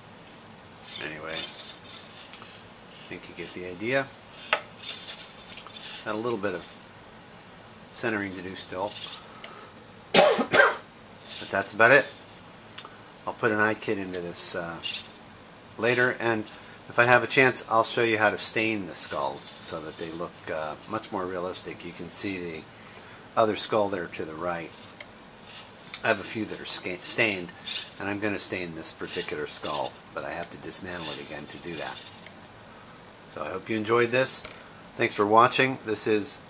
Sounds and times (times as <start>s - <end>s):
Mechanisms: 0.0s - 36.5s.